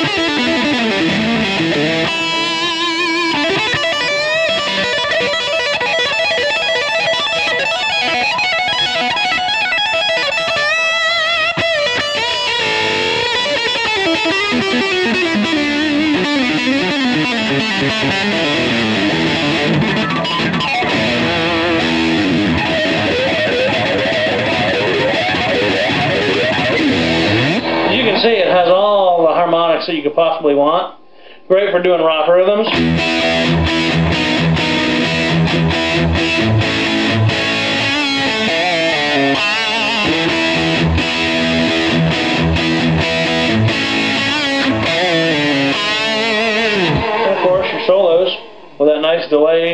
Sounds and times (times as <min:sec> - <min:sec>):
Guitar: 0:00.0 - 0:49.7.